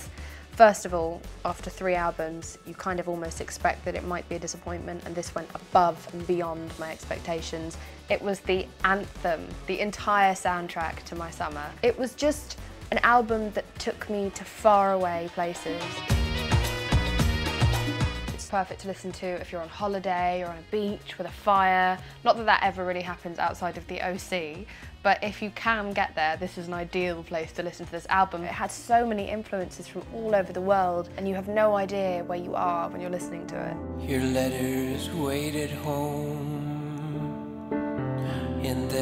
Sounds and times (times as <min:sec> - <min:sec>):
Speech: 0:00.0 - 0:16.0, 0:18.4 - 0:35.8
Music: 0:00.0 - 0:39.0.